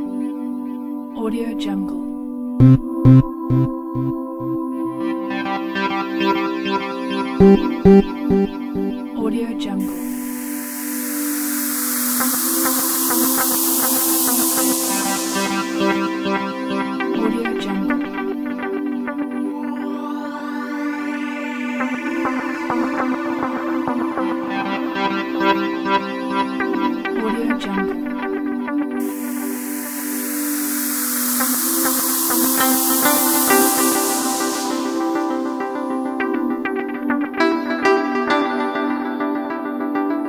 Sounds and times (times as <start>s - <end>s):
Background music: 0.0s - 40.2s.